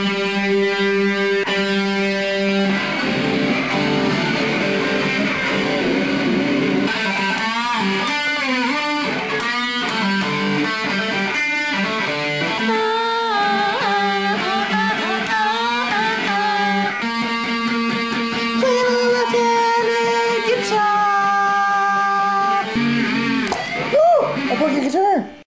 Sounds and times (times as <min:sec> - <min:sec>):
Strum: 0:00.0 - 0:24.8
Speech: 0:18.6 - 0:22.7, 0:24.5 - 0:25.4.